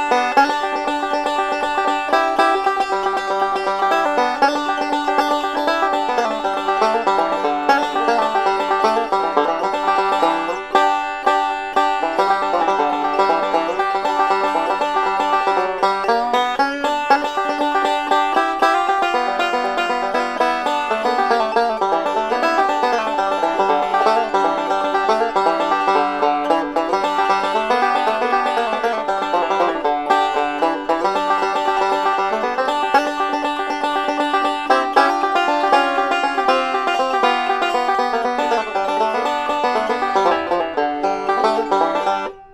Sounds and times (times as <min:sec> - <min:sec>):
Independent music: 0:00.0 - 0:42.5.